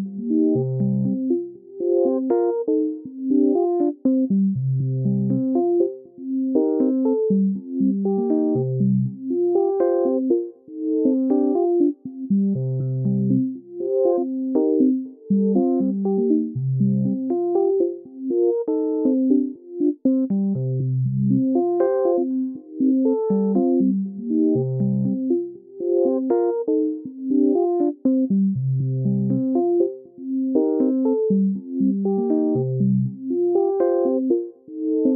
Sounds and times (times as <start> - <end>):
Music: 0.0 - 35.1.